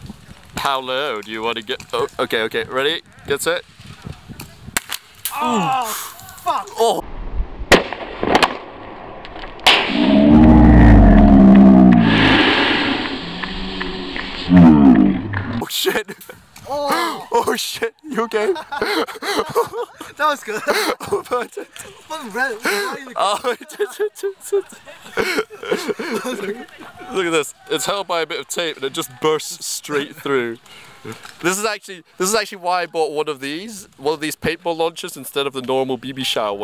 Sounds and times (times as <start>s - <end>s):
Outside, rural or natural: 0.0s - 36.6s
Speech: 0.6s - 3.6s, 16.7s - 18.6s, 26.1s - 30.6s, 31.4s - 36.6s.